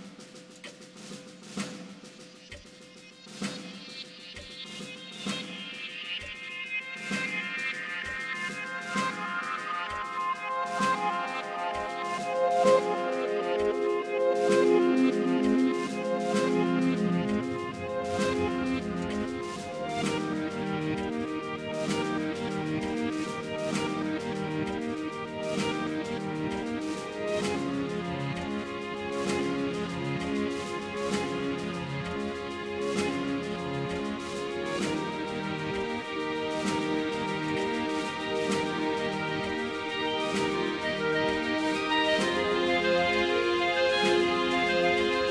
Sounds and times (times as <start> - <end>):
Music: 0.0 - 45.3.